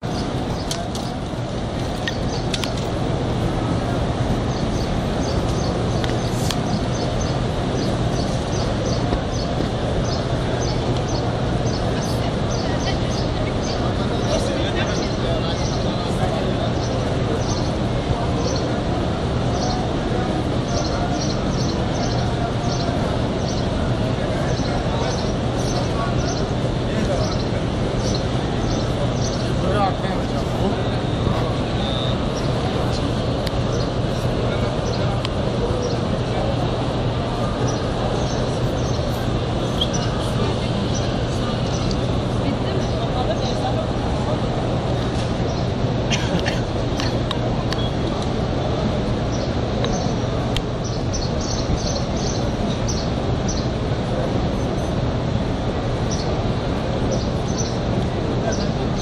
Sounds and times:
Speech: 0.0 - 59.0.

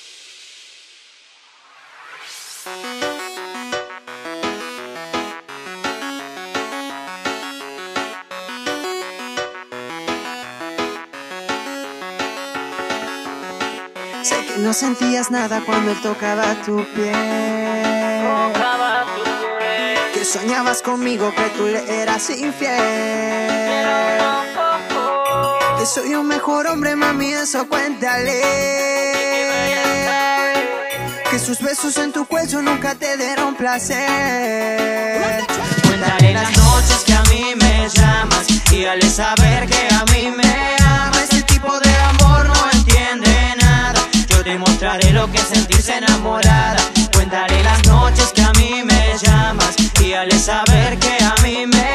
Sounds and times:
Soundtrack music: 1.5 - 51.9.

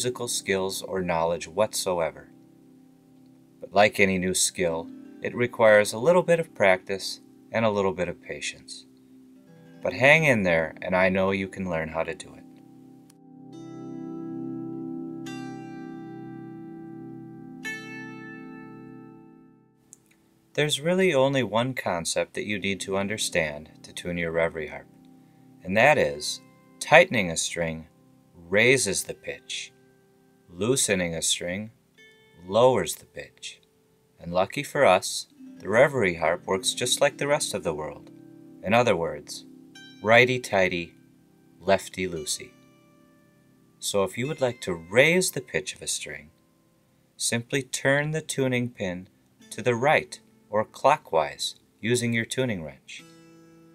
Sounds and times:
Speech: 0.0 - 2.3, 3.6 - 8.9, 9.8 - 12.5, 20.6 - 24.9, 25.6 - 29.7, 30.5 - 31.8, 32.4 - 33.6, 34.2 - 40.9, 41.6 - 42.5, 43.8 - 46.3, 47.2 - 53.1
Guitar: 0.0 - 53.7.

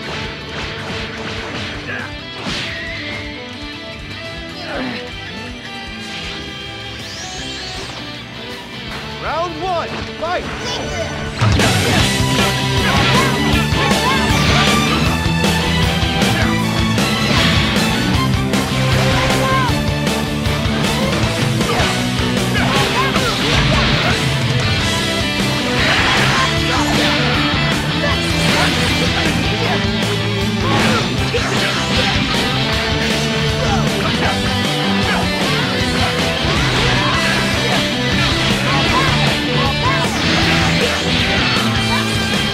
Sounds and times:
Music: 0.0 - 42.5.

